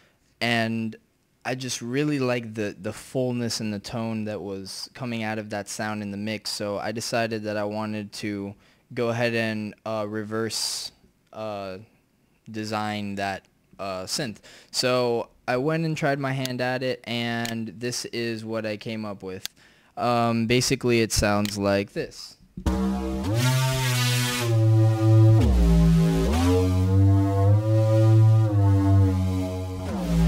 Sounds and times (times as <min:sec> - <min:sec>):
Speech: 0:00.4 - 0:11.9, 0:12.5 - 0:22.4
Musical instrument: 0:22.6 - 0:30.2.